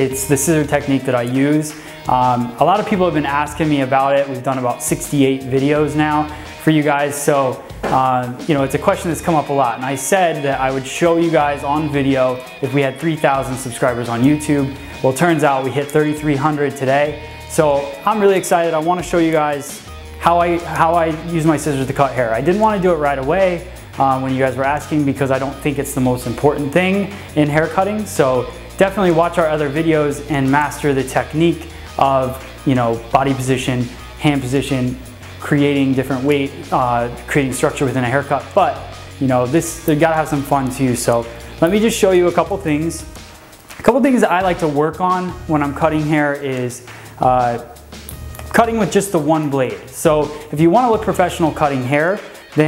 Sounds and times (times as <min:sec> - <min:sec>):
Speech: 0:00.0 - 0:43.1, 0:43.8 - 0:47.8, 0:48.5 - 0:52.6
Music: 0:00.0 - 0:52.6.